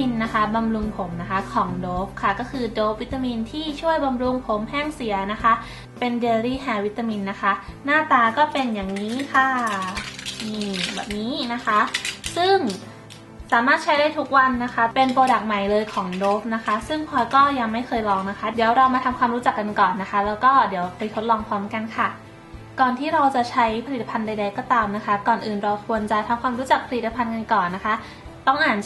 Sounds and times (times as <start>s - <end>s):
Speech: 0.0s - 12.8s, 13.5s - 22.2s, 22.8s - 28.8s
Music: 0.0s - 28.8s.